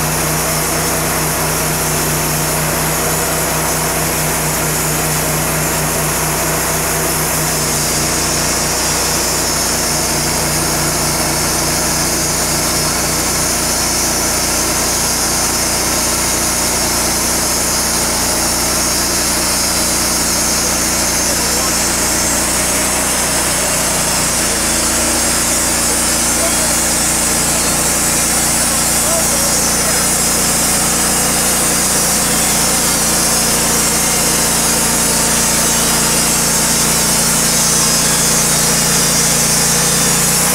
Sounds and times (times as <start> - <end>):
Speech: 20.6 - 22.5, 25.8 - 30.5.